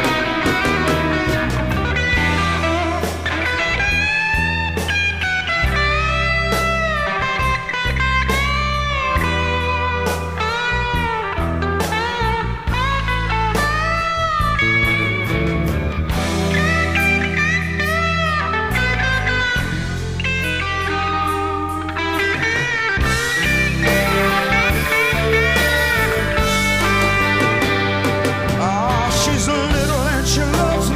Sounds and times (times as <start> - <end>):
Music: 0.0 - 30.9.